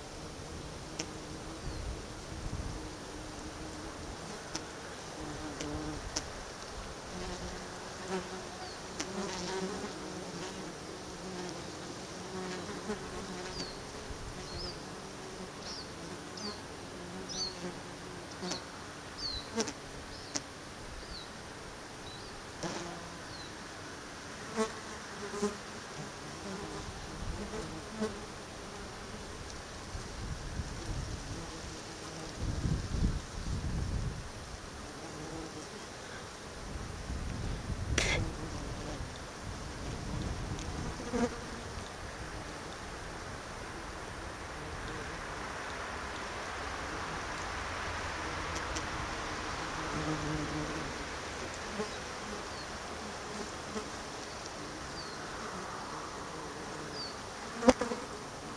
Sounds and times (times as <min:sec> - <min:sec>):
Fly, housefly: 0:00.0 - 0:21.4, 0:22.0 - 0:47.5, 0:48.2 - 0:58.5
Bee, wasp, etc.: 0:00.0 - 0:58.5.